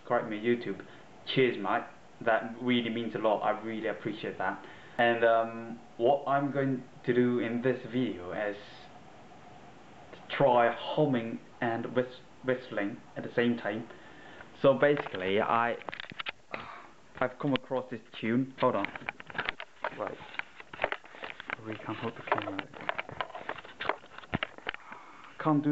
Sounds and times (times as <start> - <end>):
Speech: 0.0 - 8.9, 10.2 - 13.9, 14.6 - 15.9, 17.2 - 19.0, 19.9 - 20.3, 21.5 - 22.8, 25.4 - 25.7.